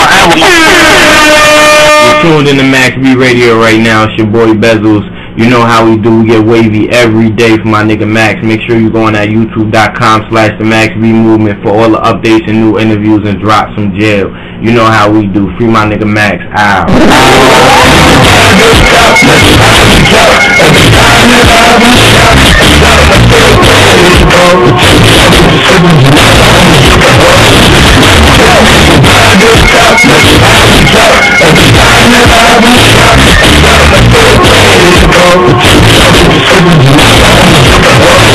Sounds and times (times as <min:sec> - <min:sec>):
Music: 0:00.0 - 0:08.0, 0:16.9 - 0:38.3
Radio: 0:00.0 - 0:38.3.